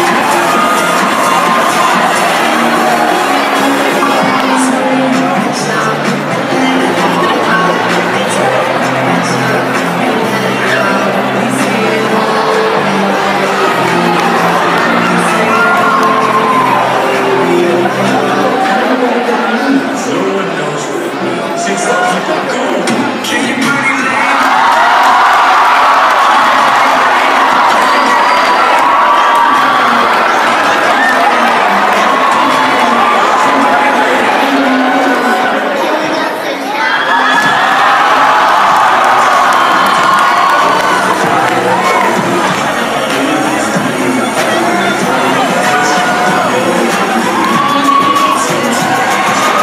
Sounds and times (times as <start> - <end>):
Speech: 0.0 - 24.9, 26.4 - 37.9, 40.3 - 49.6
Cheering: 0.0 - 49.6
Crowd: 0.0 - 49.6.